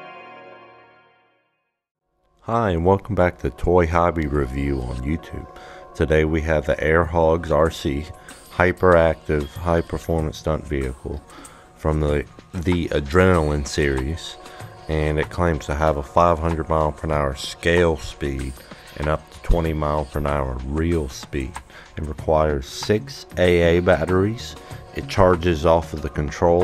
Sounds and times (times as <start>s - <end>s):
Music: 0.0s - 26.6s
Speech: 2.4s - 26.6s.